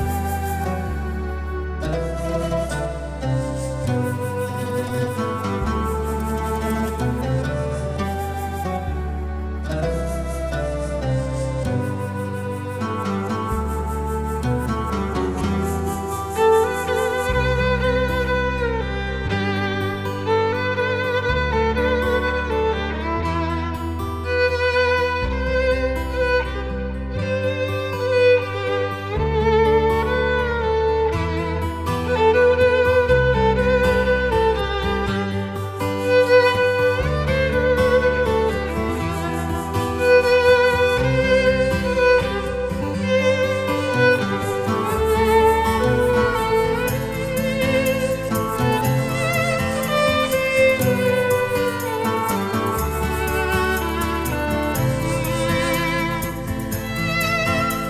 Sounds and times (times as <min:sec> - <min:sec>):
Violin, fiddle: 0:00.0 - 0:57.8.